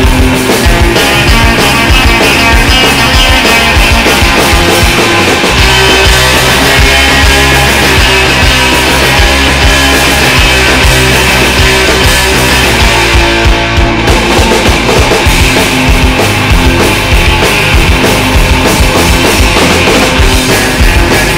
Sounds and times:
Music: 0.0s - 21.3s.

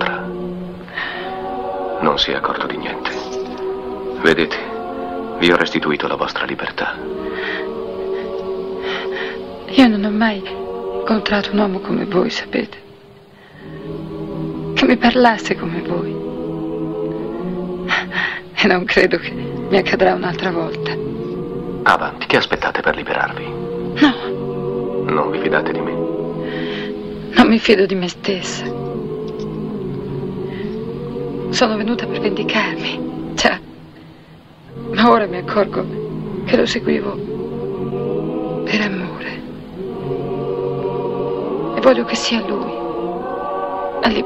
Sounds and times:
Music: 0.0s - 44.2s.

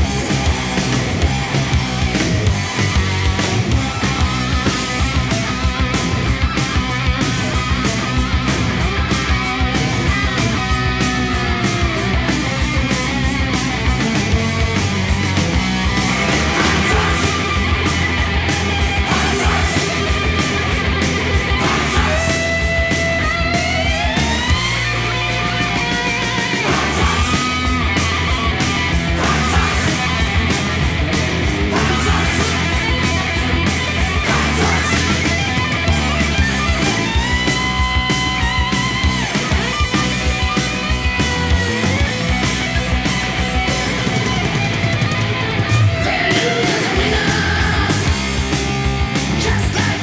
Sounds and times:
Heavy metal: 0.0s - 50.0s
Punk rock: 0.0s - 50.0s.

